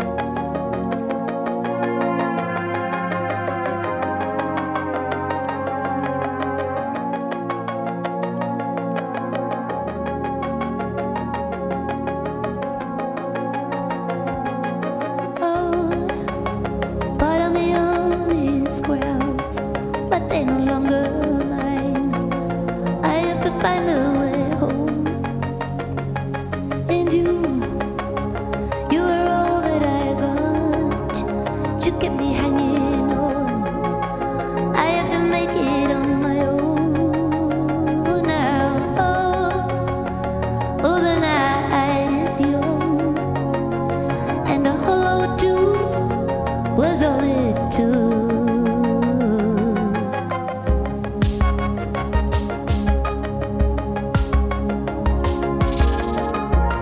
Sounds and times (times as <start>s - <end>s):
Music: 0.0s - 56.8s.